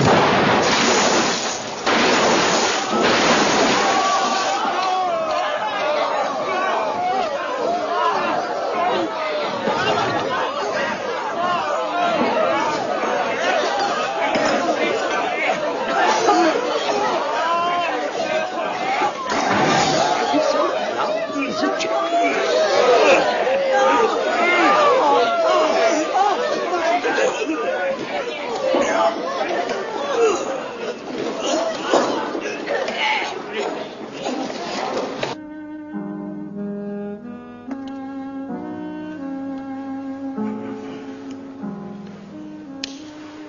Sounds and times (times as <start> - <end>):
Inside, public space: 0.0 - 43.4
Chatter: 2.6 - 35.4
Speech: 4.7 - 34.6.